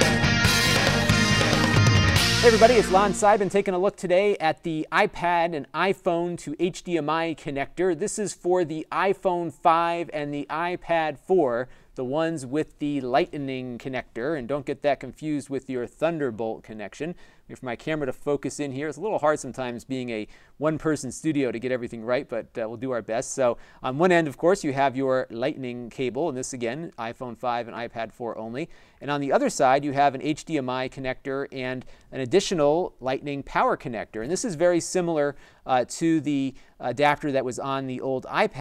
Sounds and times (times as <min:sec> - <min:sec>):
Speech: 0:02.4 - 0:38.6.